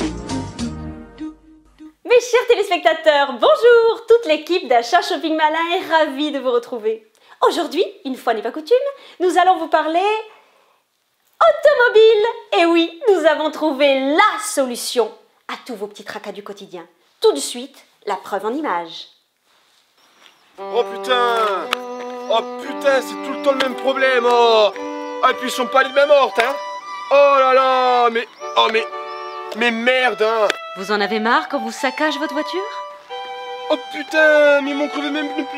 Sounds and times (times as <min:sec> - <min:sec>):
Music: 0:00.0 - 0:02.0, 0:20.6 - 0:35.5
Speech: 0:02.1 - 0:10.3, 0:11.4 - 0:19.1, 0:20.7 - 0:21.7, 0:22.3 - 0:28.9, 0:29.6 - 0:32.8, 0:33.7 - 0:35.5.